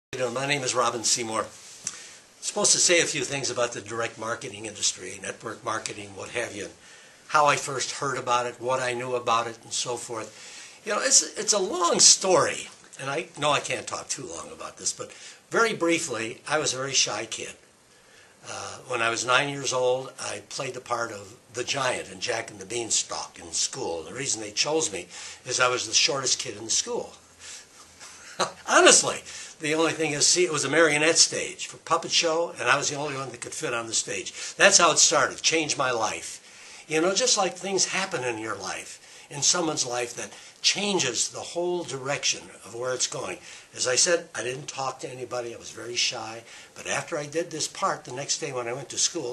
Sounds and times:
Speech: 0:00.0 - 0:01.6, 0:02.4 - 0:17.6, 0:18.4 - 0:27.2, 0:28.4 - 0:49.3.

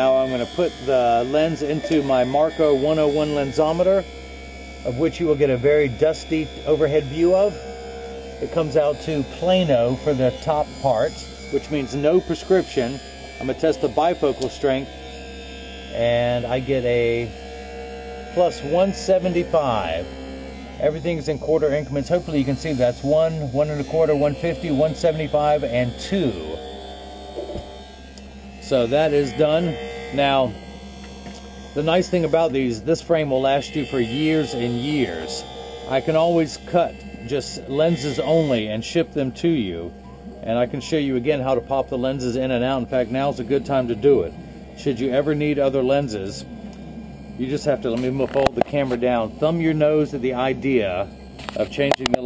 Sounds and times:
Hum: 0:00.0 - 0:52.2
Mains hum: 0:00.0 - 0:52.2.

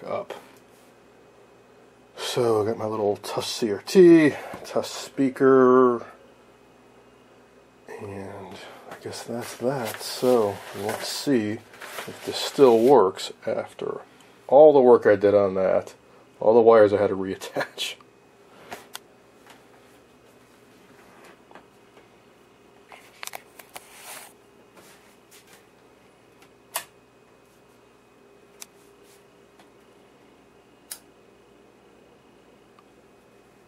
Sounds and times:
Speech: 0:00.0 - 0:00.5, 0:02.2 - 0:06.2, 0:07.9 - 0:18.0.

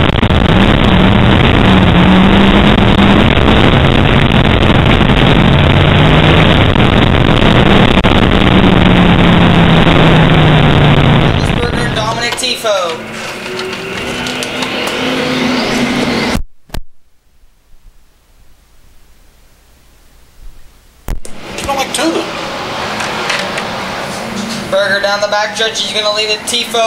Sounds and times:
Speech: 0:11.4 - 0:13.0, 0:21.6 - 0:22.3, 0:24.7 - 0:26.8.

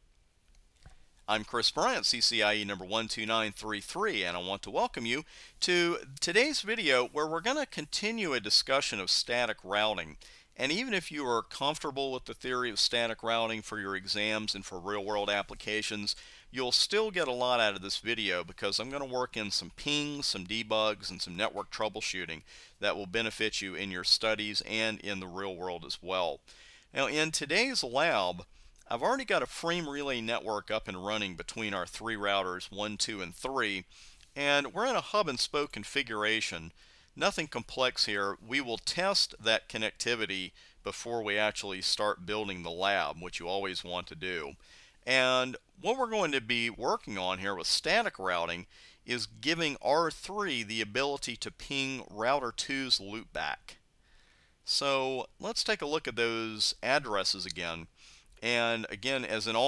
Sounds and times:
Speech: 0:01.3 - 0:26.4, 0:27.0 - 0:53.8, 0:54.7 - 0:59.6.

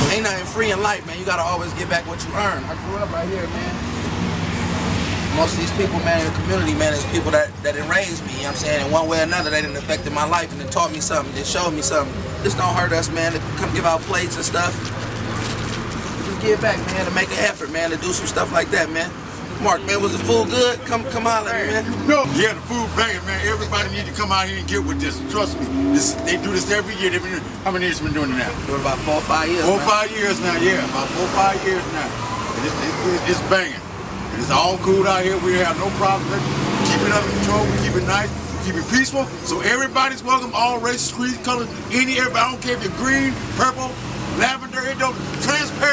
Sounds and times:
Speech: 0:00.0 - 0:03.8, 0:05.3 - 0:14.8, 0:16.2 - 0:45.9.

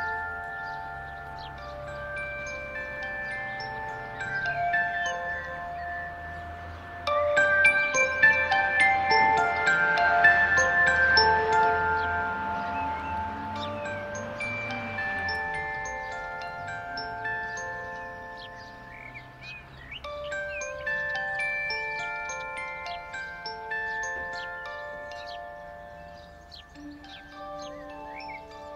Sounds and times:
Glockenspiel: 0:00.0 - 0:28.7
Marimba, xylophone: 0:00.0 - 0:28.7.

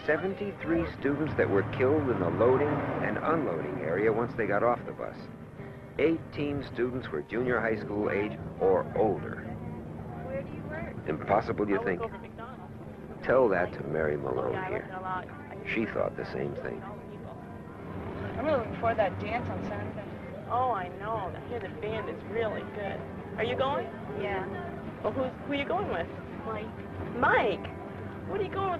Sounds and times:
Bus: 0:00.0 - 0:28.8.

